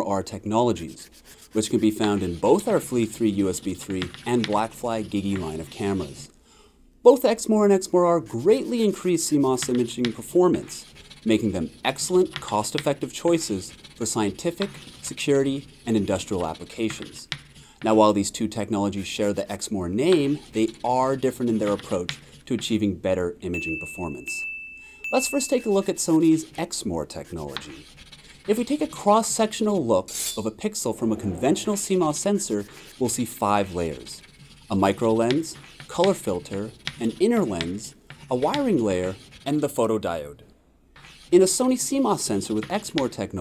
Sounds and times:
Speech: 0:00.0 - 0:06.3, 0:07.0 - 0:24.5, 0:25.2 - 0:27.8, 0:28.5 - 0:40.5, 0:41.3 - 0:43.4.

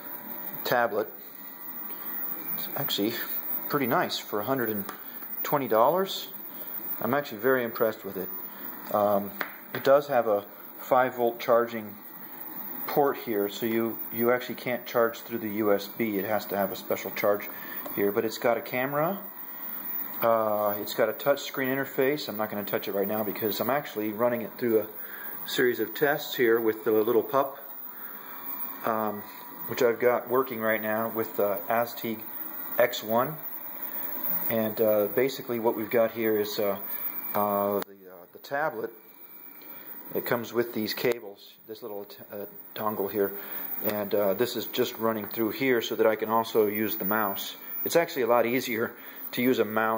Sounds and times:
Speech: 0:00.6 - 0:01.2, 0:02.6 - 0:06.4, 0:07.0 - 0:12.0, 0:12.9 - 0:19.2, 0:20.2 - 0:27.6, 0:28.8 - 0:33.4, 0:34.4 - 0:39.0, 0:40.1 - 0:49.9.

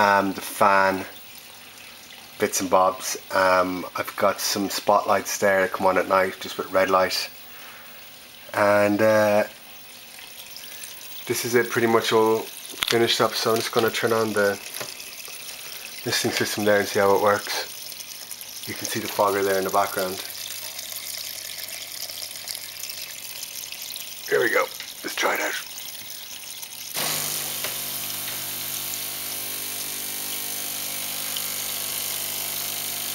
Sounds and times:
Speech: 0:00.0 - 0:01.2, 0:02.4 - 0:07.4, 0:08.5 - 0:09.6, 0:11.3 - 0:14.6, 0:16.0 - 0:17.7, 0:18.7 - 0:20.3, 0:24.3 - 0:25.7.

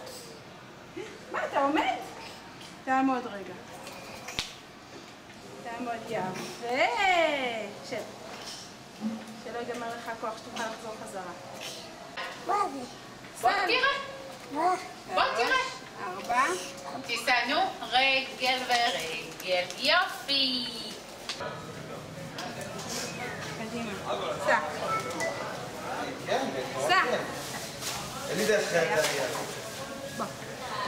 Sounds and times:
Child speech, kid speaking: 0:12.4 - 0:13.0, 0:14.5 - 0:17.4.

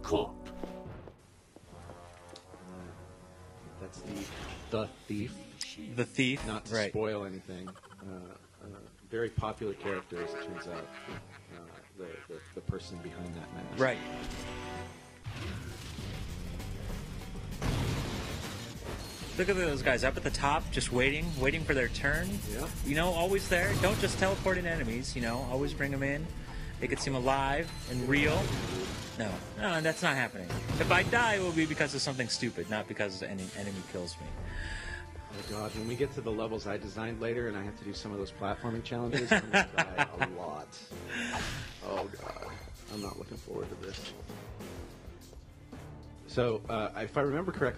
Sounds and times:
Speech: 0:03.7 - 0:10.9, 0:11.6 - 0:14.0, 0:19.4 - 0:34.3, 0:35.4 - 0:40.9, 0:41.8 - 0:44.2, 0:46.3 - 0:47.7.

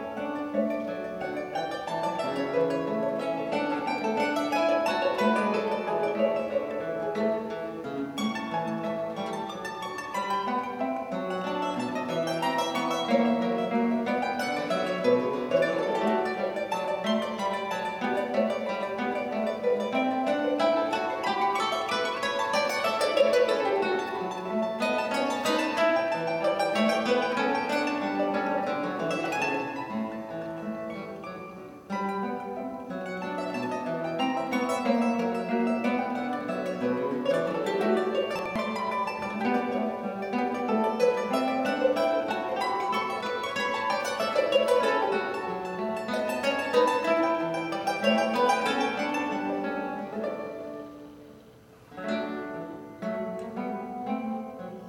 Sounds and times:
Acoustic guitar: 0:00.0 - 0:54.8.

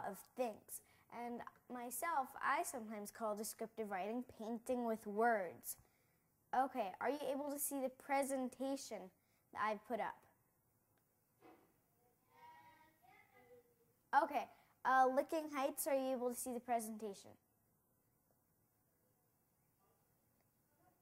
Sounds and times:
Speech: 0:00.0 - 0:05.8, 0:06.6 - 0:10.2, 0:14.2 - 0:17.4.

